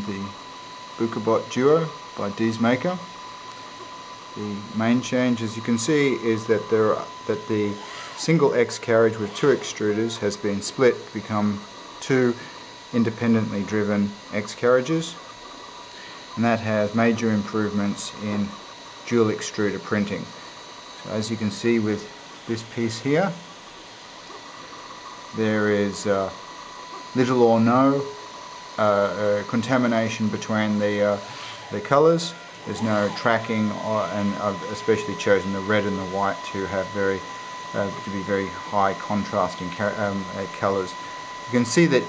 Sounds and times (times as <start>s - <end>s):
Speech: 0.0s - 0.4s, 1.0s - 3.1s, 4.4s - 15.2s, 16.4s - 20.4s, 21.0s - 23.4s, 25.3s - 26.4s, 27.1s - 28.2s, 28.8s - 42.0s.